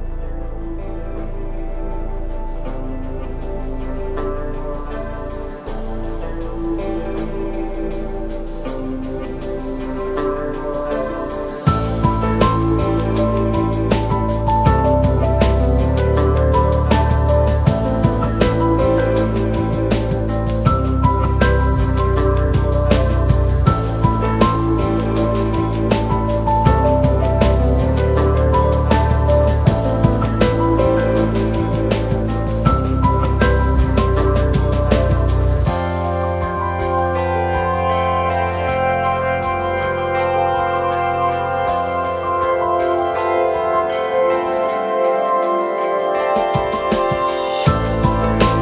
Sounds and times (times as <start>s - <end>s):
Music: 0.0s - 48.6s.